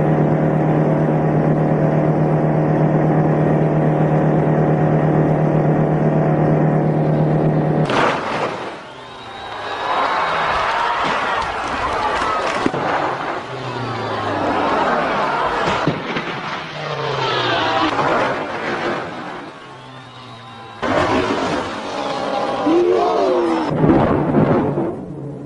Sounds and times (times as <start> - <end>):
Car: 0.0 - 9.9, 12.3 - 23.8.